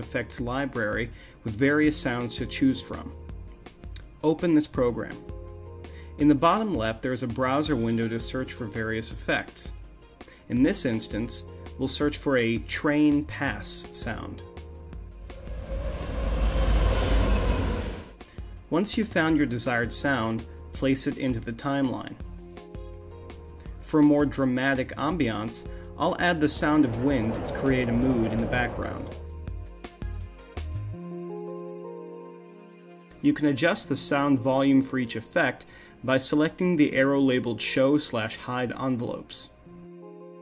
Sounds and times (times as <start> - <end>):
Speech: 0.0 - 3.2, 4.2 - 5.2, 6.2 - 9.8, 10.5 - 14.5, 18.7 - 22.2, 23.9 - 29.2, 33.2 - 39.6
Music: 0.0 - 40.4.